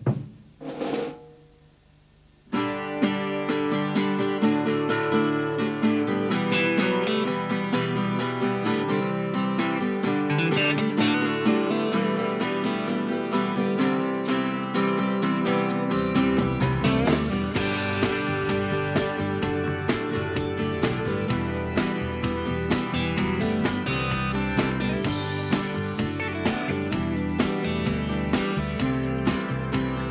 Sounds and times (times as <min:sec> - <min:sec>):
Music: 0:00.0 - 0:01.6, 0:02.5 - 0:30.1.